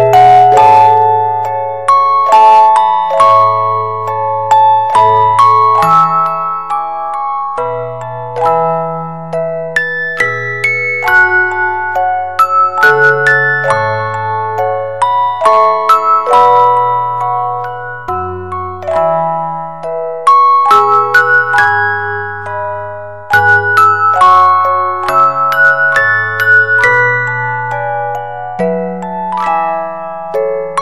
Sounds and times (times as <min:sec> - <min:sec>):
Music: 0:00.0 - 0:30.8.